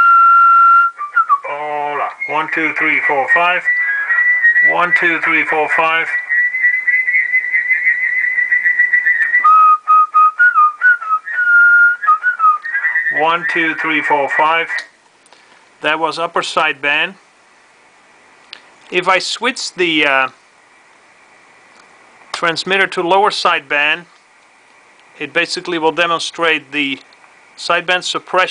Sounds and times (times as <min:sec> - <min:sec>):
Whistling: 0:00.0 - 0:13.8.